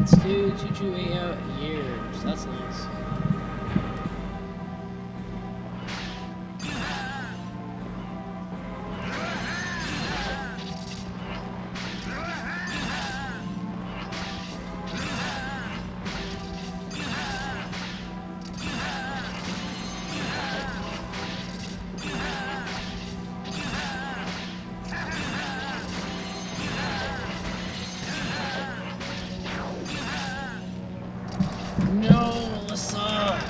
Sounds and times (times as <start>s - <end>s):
Music: 0.0s - 33.4s.